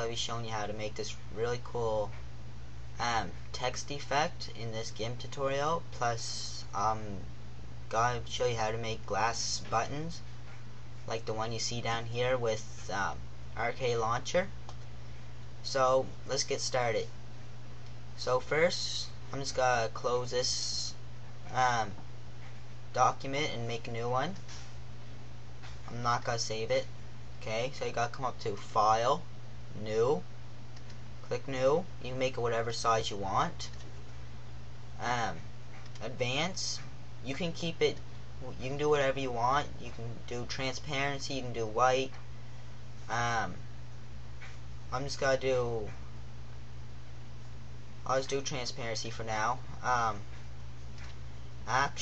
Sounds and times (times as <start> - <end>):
Speech: 0.0 - 2.2, 3.0 - 7.3, 7.9 - 10.3, 11.1 - 14.6, 15.6 - 17.2, 18.2 - 22.0, 22.9 - 24.5, 25.9 - 30.3, 31.3 - 33.8, 35.0 - 42.2, 43.1 - 43.7, 44.9 - 46.0, 48.0 - 50.3, 51.6 - 52.0.